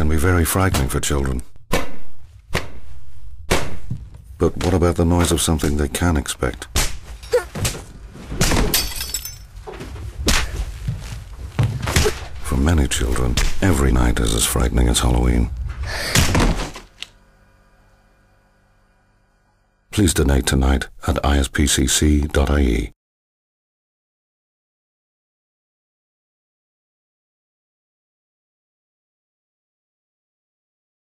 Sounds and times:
Speech: 0.0s - 1.5s, 4.4s - 6.7s, 12.4s - 15.5s, 19.9s - 23.0s.

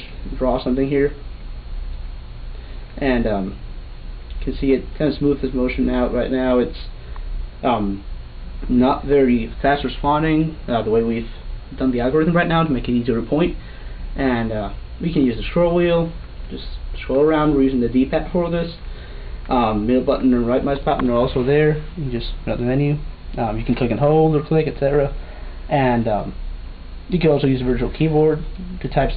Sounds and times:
Speech: 0.0s - 1.2s, 3.0s - 3.6s, 4.4s - 7.0s, 7.6s - 13.6s, 14.2s - 18.8s, 19.5s - 26.4s, 27.1s - 29.1s.

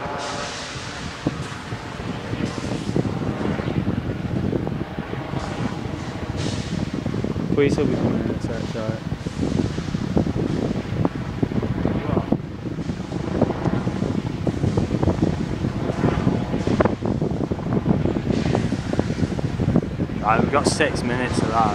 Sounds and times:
Wind noise (microphone): 0.0s - 21.7s.

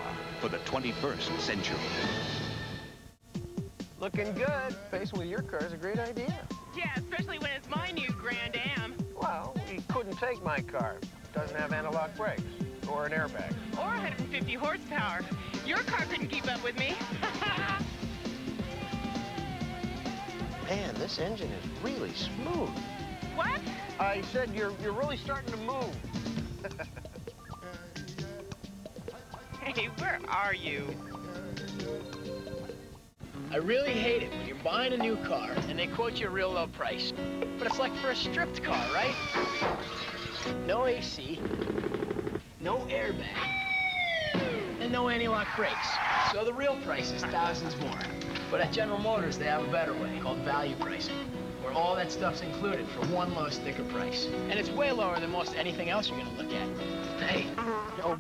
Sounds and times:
Music: 0.0s - 58.2s.

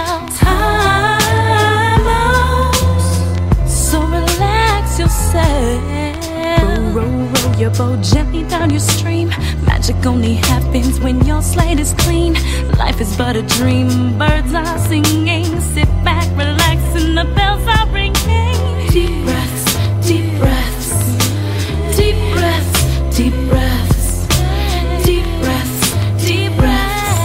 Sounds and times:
Rhythm and blues: 0.0s - 27.2s.

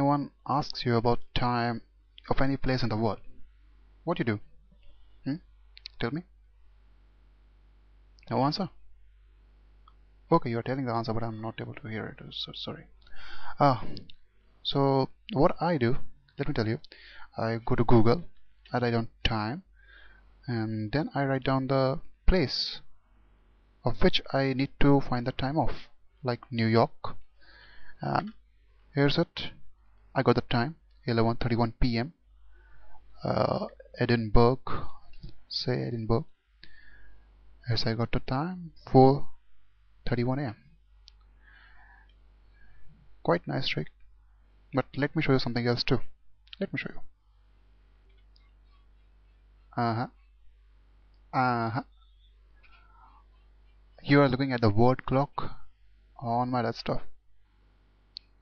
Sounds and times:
Speech: 0.0s - 3.3s, 4.0s - 4.5s, 5.2s - 6.3s, 8.2s - 8.8s, 10.3s - 19.7s, 20.5s - 22.9s, 23.8s - 27.2s, 28.0s - 29.6s, 30.2s - 32.2s, 33.2s - 36.4s, 37.6s - 39.4s, 40.0s - 40.6s, 43.2s - 44.0s, 44.8s - 47.1s, 48.3s - 50.4s, 51.3s - 57.2s.

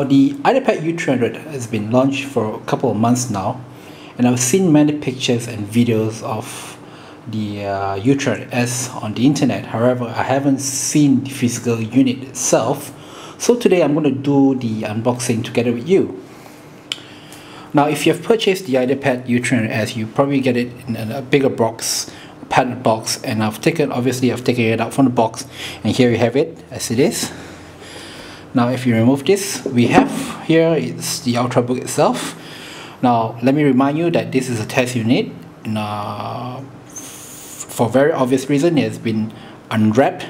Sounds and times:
Speech: 0.0s - 16.2s, 17.7s - 27.4s, 28.5s - 32.4s, 33.0s - 40.2s.

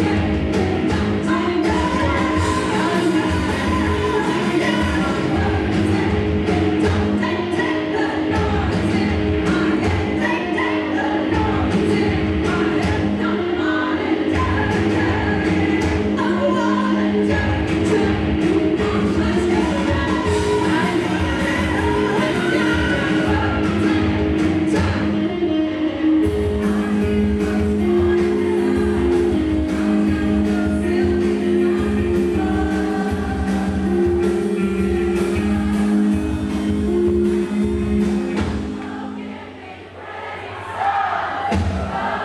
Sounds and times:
Electric guitar: 0.0s - 39.4s.

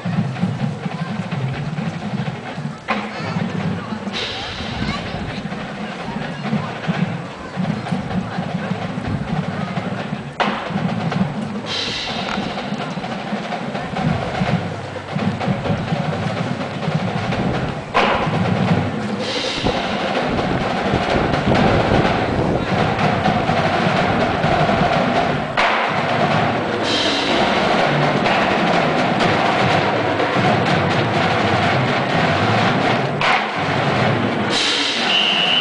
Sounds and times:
Speech: 0.0s - 10.5s, 11.7s - 16.6s
Music: 0.0s - 35.6s.

